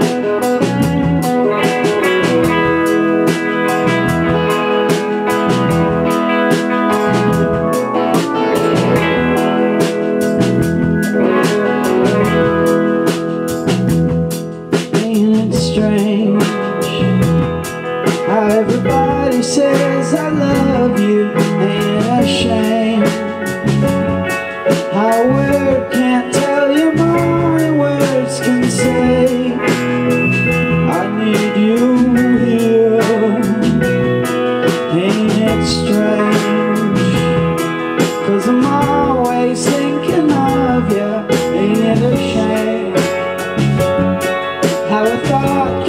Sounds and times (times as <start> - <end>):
Music: 0.0 - 45.8.